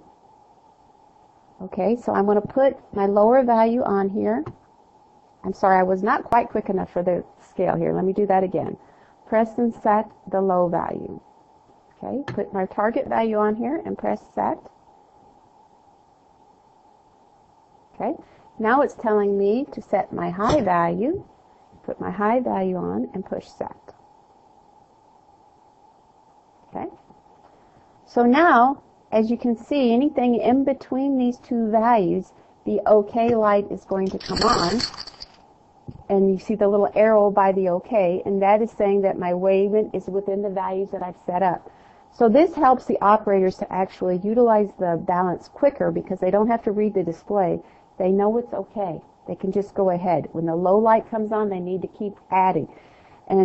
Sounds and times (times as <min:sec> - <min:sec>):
Speech: 0:01.6 - 0:04.5, 0:05.5 - 0:11.2, 0:12.0 - 0:14.6, 0:18.0 - 0:23.9, 0:26.7 - 0:27.0, 0:28.1 - 0:34.9, 0:36.0 - 0:52.7.